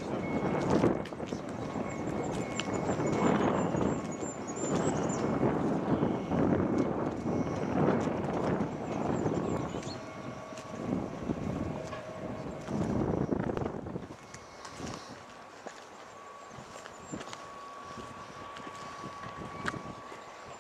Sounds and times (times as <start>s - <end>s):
Wind: 0.0s - 20.6s.